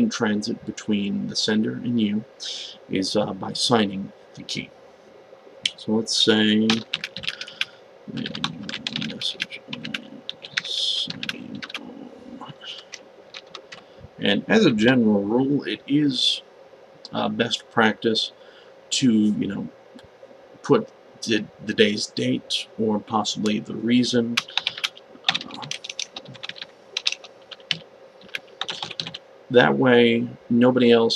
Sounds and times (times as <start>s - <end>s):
Speech: 0.0s - 4.7s, 5.7s - 6.9s, 8.1s - 12.9s, 14.2s - 16.4s, 17.1s - 19.8s, 20.6s - 26.4s, 28.7s - 31.1s
Computer keyboard: 6.7s - 7.6s, 8.2s - 11.8s, 12.8s - 13.8s, 24.4s - 29.2s.